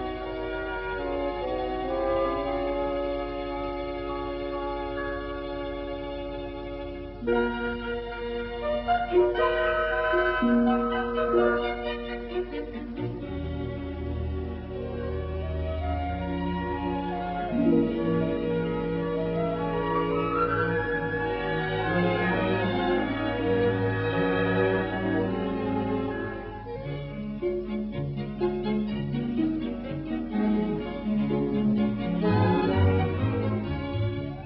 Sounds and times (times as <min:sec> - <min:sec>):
Music: 0:00.0 - 0:34.4.